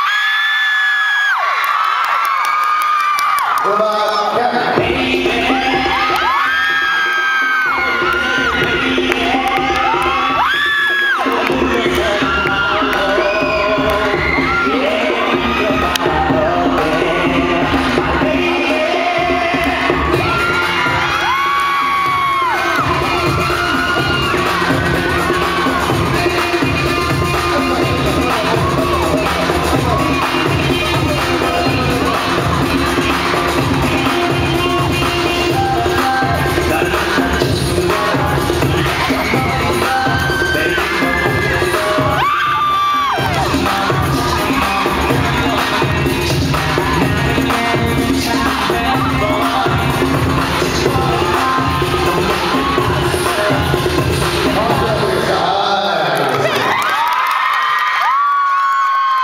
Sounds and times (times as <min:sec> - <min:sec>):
Music: 0:02.0 - 0:59.2.